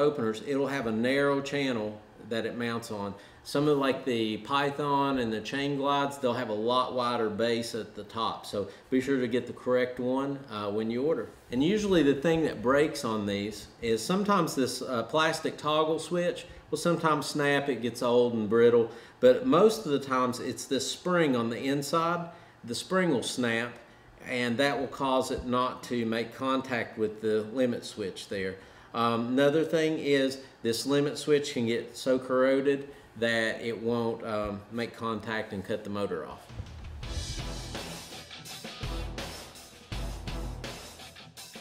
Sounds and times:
Speech: 0.0s - 36.5s.

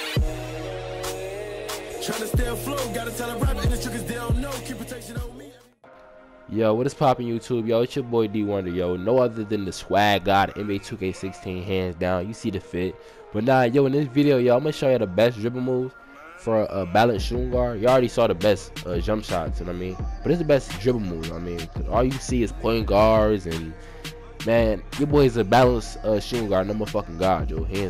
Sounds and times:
Music: 0.0s - 27.9s
Speech: 6.5s - 23.8s, 24.4s - 27.9s.

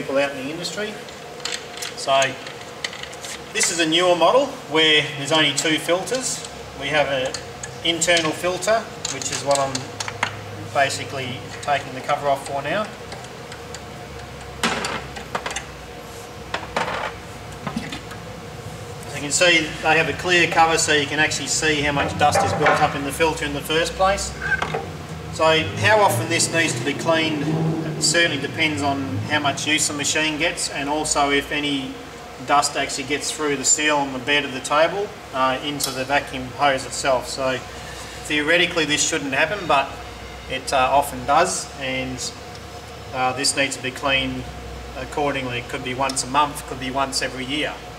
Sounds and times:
Speech: 0.0s - 1.0s, 2.0s - 2.4s, 3.6s - 9.9s, 10.6s - 13.0s, 19.1s - 24.4s, 25.4s - 42.4s, 43.1s - 47.8s.

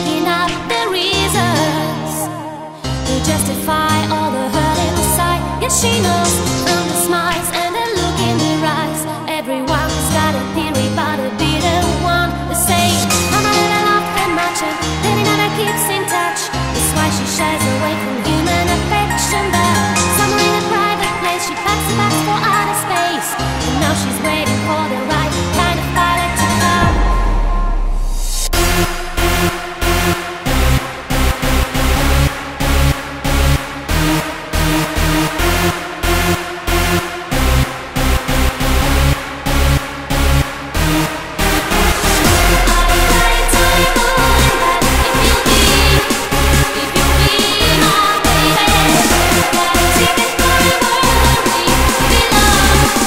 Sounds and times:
Techno: 0.0s - 53.0s.

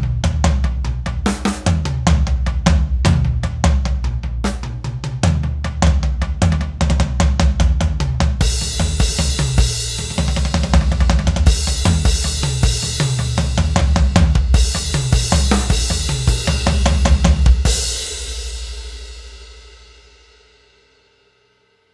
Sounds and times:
Music: 0.0s - 21.9s.

